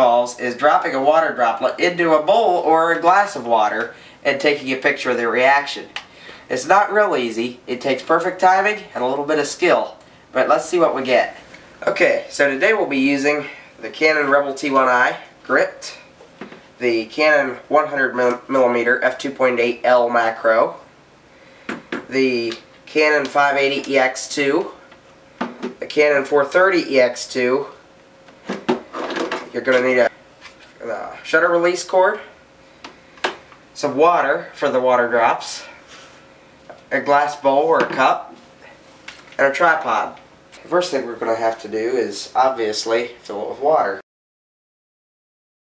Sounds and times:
Speech: 0.0s - 16.1s, 16.8s - 20.9s, 22.1s - 24.8s, 25.8s - 27.8s, 29.5s - 30.1s, 30.8s - 32.4s, 33.8s - 35.8s, 36.9s - 38.4s, 39.4s - 44.0s.

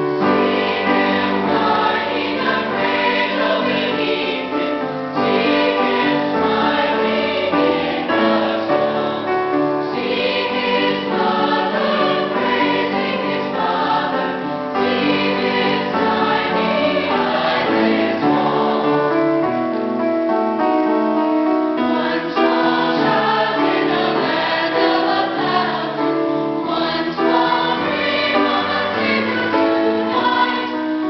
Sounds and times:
Choir: 0.0s - 19.6s, 21.8s - 31.0s
Inside, large room or hall: 0.0s - 31.0s.

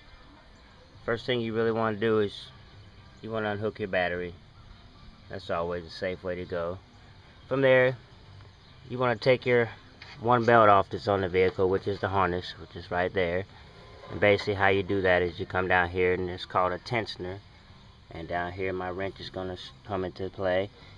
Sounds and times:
Speech: 1.0s - 2.5s, 3.2s - 4.4s, 5.3s - 6.8s, 7.5s - 8.0s, 8.9s - 13.5s, 14.1s - 17.4s, 18.1s - 20.8s.

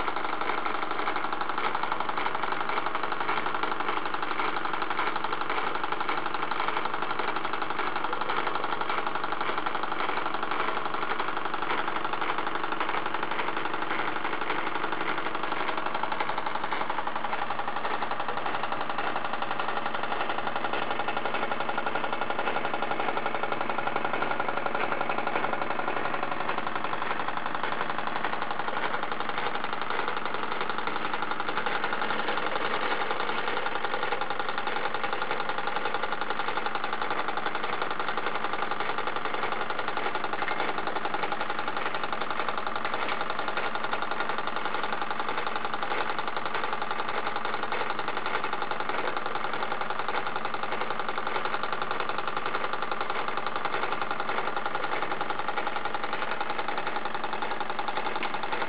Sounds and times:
Idling: 0.0s - 58.6s
Medium engine (mid frequency): 0.0s - 58.6s.

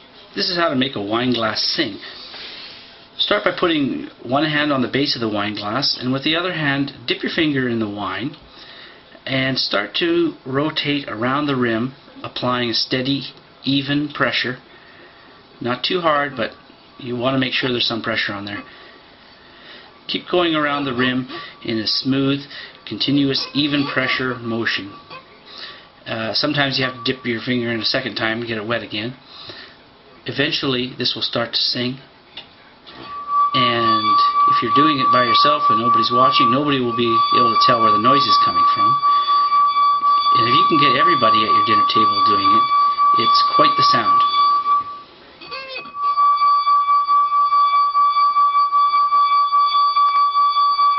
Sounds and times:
Speech: 0.3s - 2.2s, 3.2s - 8.4s, 9.2s - 14.6s, 15.6s - 18.7s, 20.1s - 25.0s, 26.1s - 29.2s, 30.2s - 32.1s, 33.6s - 39.0s, 40.4s - 44.3s.

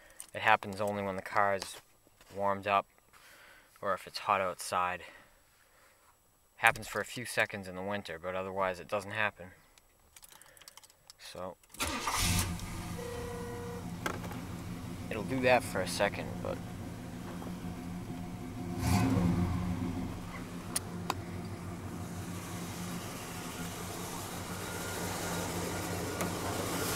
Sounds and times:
Speech: 0.3s - 2.9s, 3.8s - 5.2s, 6.6s - 9.6s, 11.2s - 11.6s, 15.1s - 16.6s
Engine: 11.8s - 26.9s.

